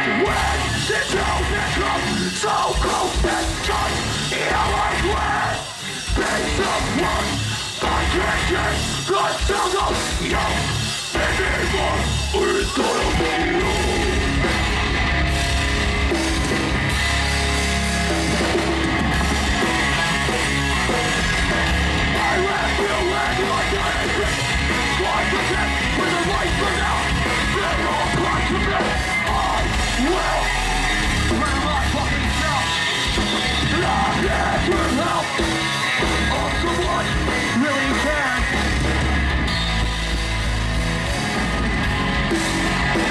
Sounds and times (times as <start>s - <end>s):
Music: 0.0s - 43.1s.